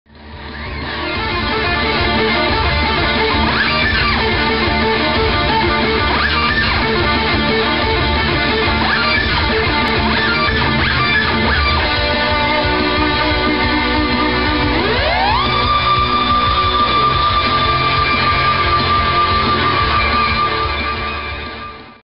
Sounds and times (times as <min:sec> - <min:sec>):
Electric guitar: 0:00.1 - 0:22.0
Strum: 0:00.2 - 0:21.8.